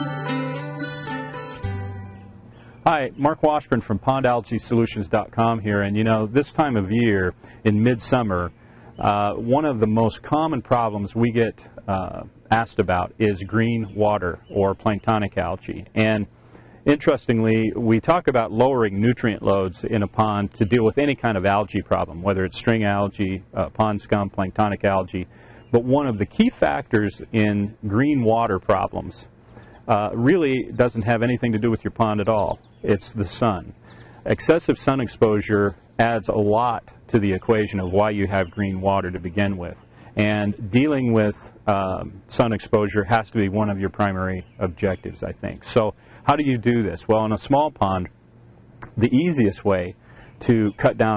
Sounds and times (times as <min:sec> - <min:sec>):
Speech: 0:02.8 - 0:29.3, 0:29.9 - 0:48.2, 0:48.8 - 0:51.1.